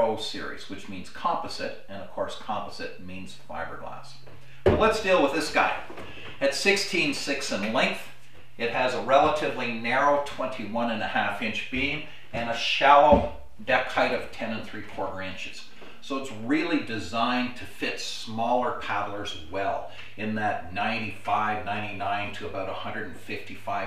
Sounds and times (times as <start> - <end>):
Speech: 0.0 - 23.8.